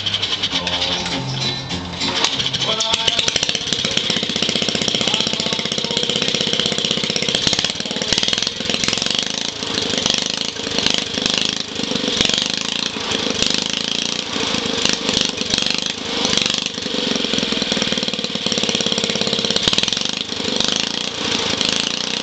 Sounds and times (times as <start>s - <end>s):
Engine: 0.0s - 22.2s.